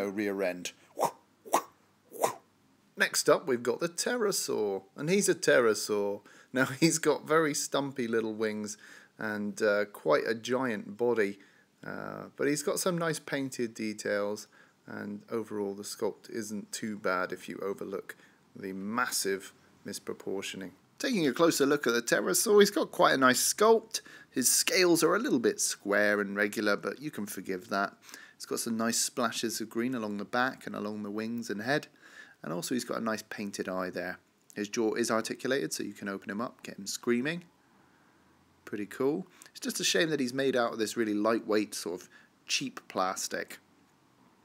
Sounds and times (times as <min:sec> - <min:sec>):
Speech: 0:00.0 - 0:00.8, 0:03.0 - 0:37.5, 0:38.6 - 0:43.7
Inside, small room: 0:00.0 - 0:44.4.